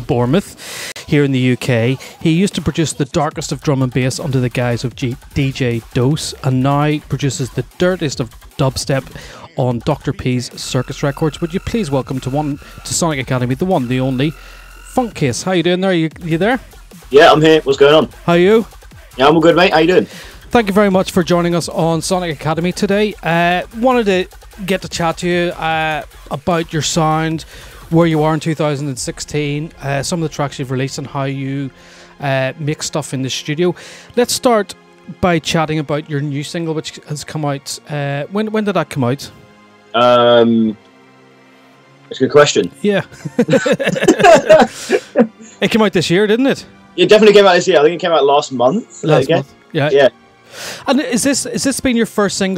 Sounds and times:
Speech: 0.0s - 14.3s, 15.0s - 39.3s, 40.0s - 40.8s, 42.1s - 43.6s, 45.4s - 50.1s, 50.8s - 52.5s
Music: 0.0s - 52.5s.

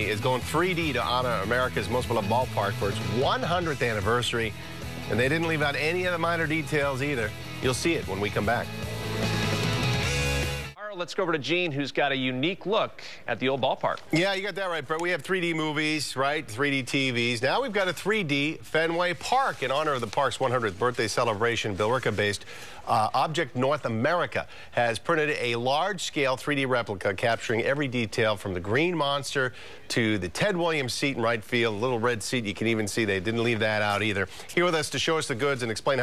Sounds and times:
Speech: 0.0s - 4.5s, 5.1s - 8.7s, 10.8s - 36.0s.

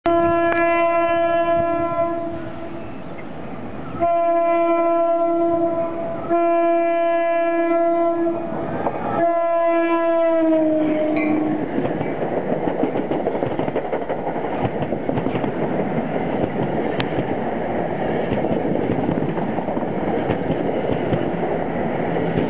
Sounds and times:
Vehicle horn, car horn, honking: 0.1s - 3.0s, 4.0s - 8.5s, 9.2s - 11.6s
Train horn: 0.1s - 3.1s, 3.8s - 11.8s
Railroad car, train wagon: 0.1s - 22.4s.

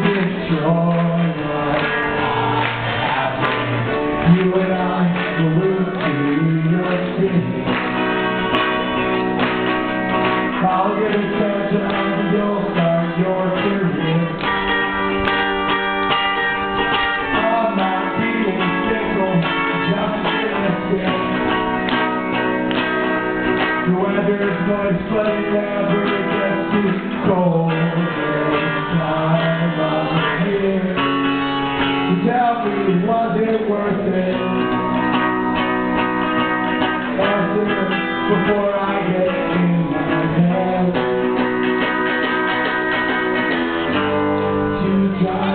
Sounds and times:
Music: 0.0s - 45.5s.

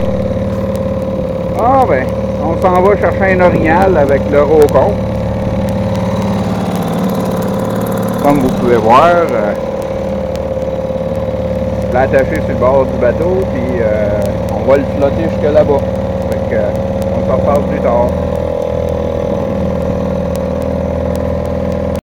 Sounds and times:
Motorboat, speedboat: 0.0s - 22.0s
Speech: 1.6s - 5.0s, 8.2s - 9.6s, 11.9s - 18.2s.

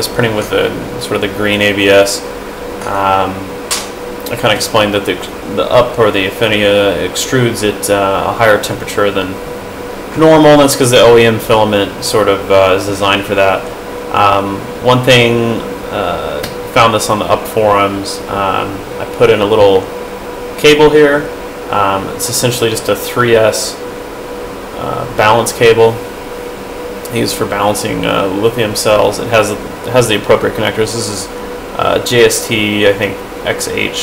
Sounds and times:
Speech: 0.0s - 3.5s, 4.2s - 9.4s, 10.1s - 19.9s, 20.6s - 23.8s, 24.8s - 26.1s, 27.1s - 34.0s.

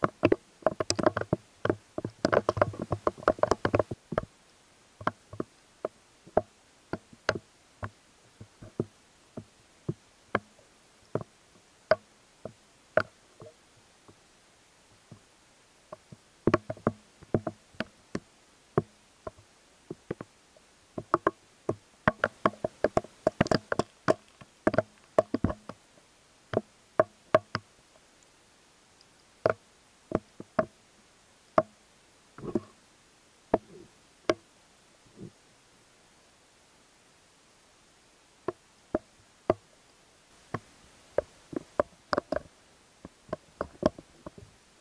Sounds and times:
Outside, rural or natural: 0.0s - 44.8s.

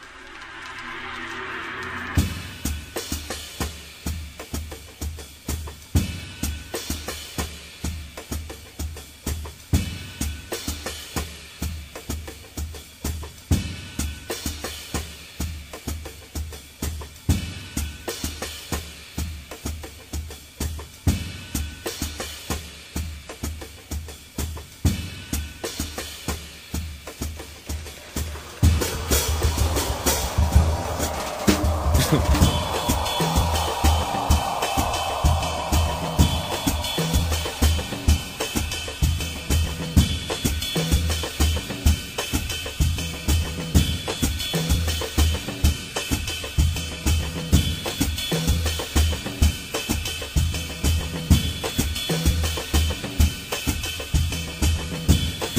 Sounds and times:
Music: 0.0s - 55.5s.

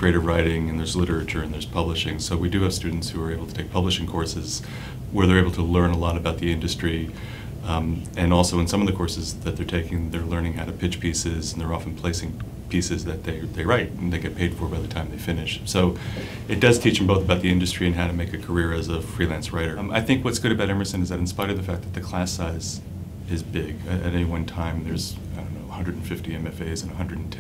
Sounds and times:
Speech: 0.0s - 27.4s.

